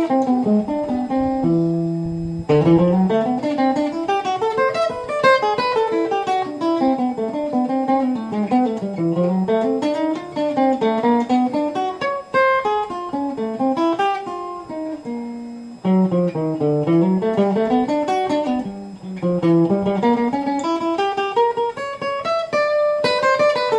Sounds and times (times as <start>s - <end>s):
Strum: 0.0s - 23.7s.